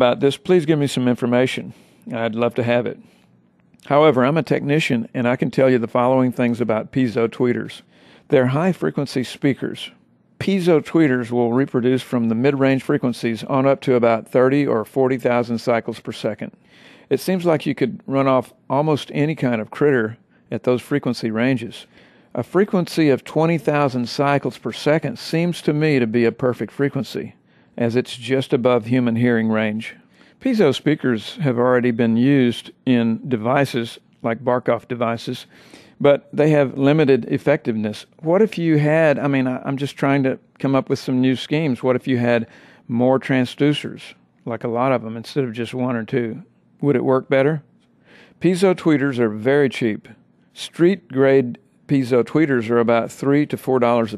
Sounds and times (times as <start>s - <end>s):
Speech: 0.0s - 3.1s, 3.8s - 47.7s, 48.4s - 54.1s.